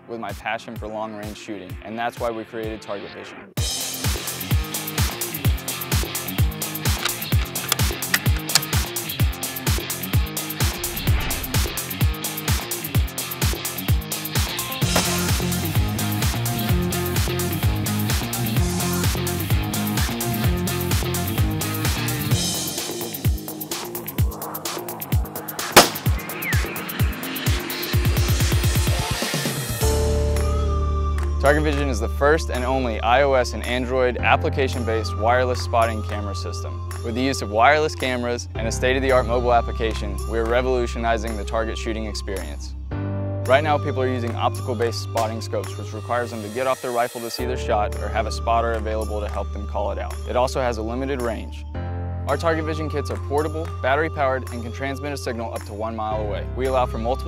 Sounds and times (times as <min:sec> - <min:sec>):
Music: 0:00.0 - 0:57.2.